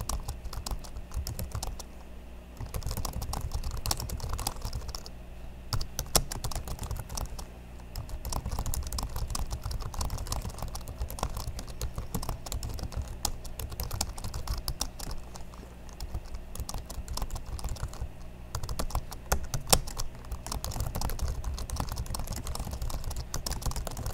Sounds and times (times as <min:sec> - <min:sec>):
Computer keyboard: 0:00.0 - 0:01.9, 0:02.6 - 0:05.1, 0:05.7 - 0:24.1.